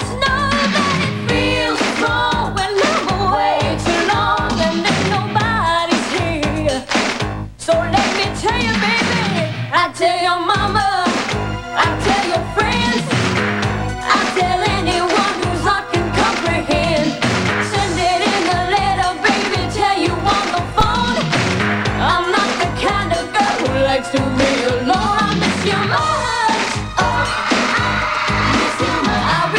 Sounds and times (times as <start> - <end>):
Music: 0.0 - 29.5.